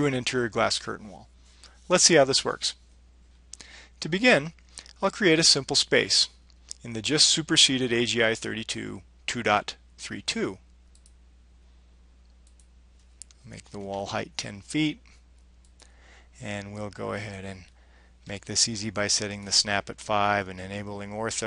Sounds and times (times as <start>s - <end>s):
Speech: 0.0s - 1.3s, 1.9s - 2.8s, 4.0s - 10.6s, 13.4s - 15.1s, 16.4s - 17.7s, 18.3s - 21.4s.